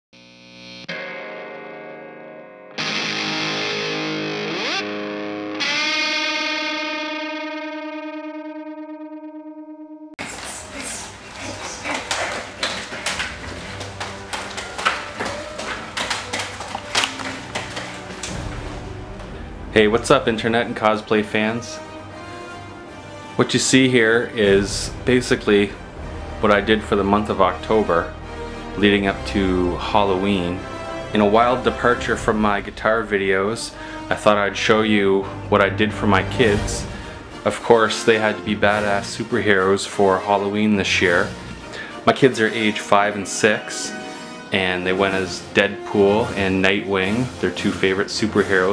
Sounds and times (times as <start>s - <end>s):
Distortion: 0.1s - 48.7s
Music: 0.8s - 48.7s.